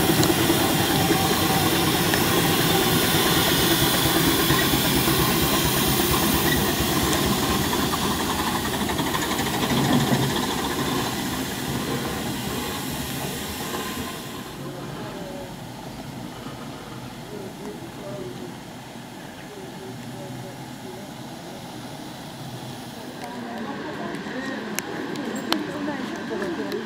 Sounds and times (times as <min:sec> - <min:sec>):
Hiss: 0:00.0 - 0:26.8.